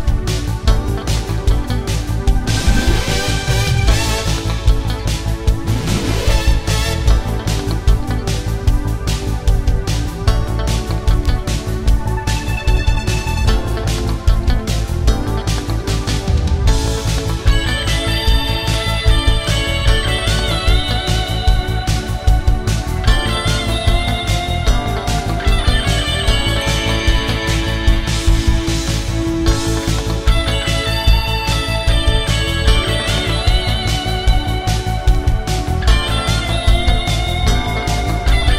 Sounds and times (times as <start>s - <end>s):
Music: 0.0s - 38.5s.